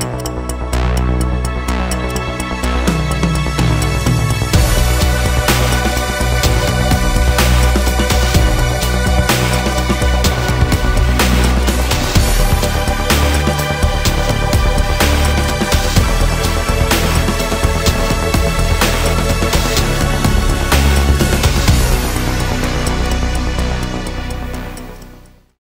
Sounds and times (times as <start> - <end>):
Music: 0.0 - 25.6.